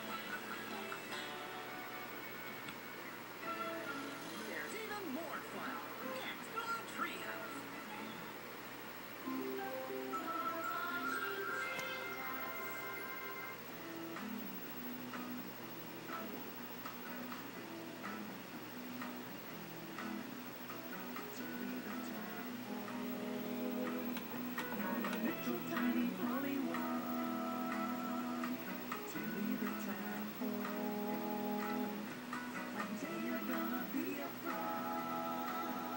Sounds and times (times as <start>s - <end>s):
Music: 0.0s - 35.9s
Speech: 4.4s - 8.4s.